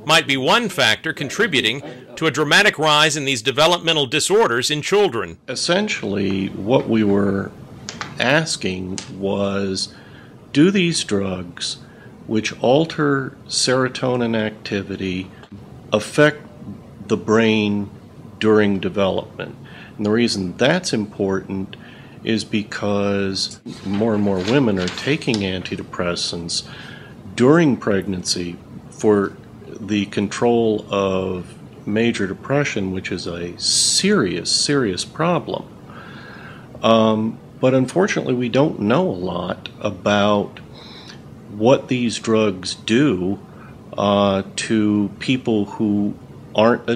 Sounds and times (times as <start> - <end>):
Speech: 0.0 - 7.6, 8.2 - 26.7, 27.3 - 35.7, 36.8 - 40.7, 41.5 - 46.9.